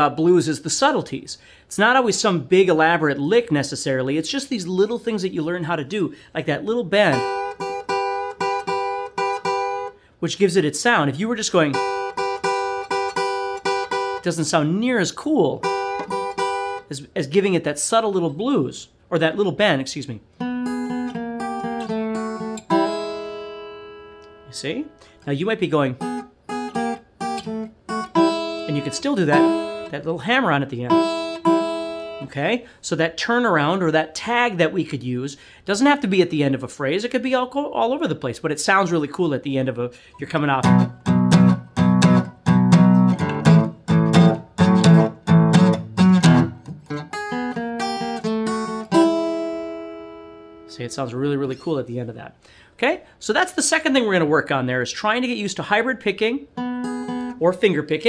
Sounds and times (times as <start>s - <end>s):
Speech: 0.0s - 7.3s, 10.2s - 11.8s, 14.2s - 15.7s, 16.9s - 20.3s, 24.5s - 26.0s, 28.6s - 31.0s, 32.2s - 40.7s, 50.7s - 56.5s, 57.4s - 58.0s
Acoustic guitar: 7.0s - 10.2s, 11.6s - 14.6s, 15.5s - 17.0s, 20.3s - 32.4s, 40.0s - 51.7s, 56.4s - 57.8s
Strum: 20.4s - 25.2s, 26.0s - 30.0s, 30.9s - 32.4s, 40.6s - 51.0s.